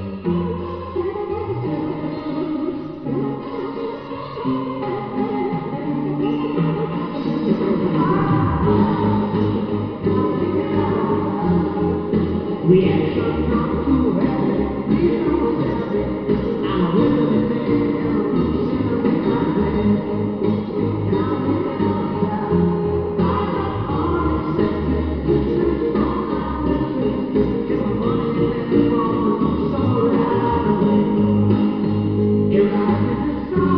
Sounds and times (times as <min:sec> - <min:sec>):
Drum kit: 0:07.2 - 0:33.7.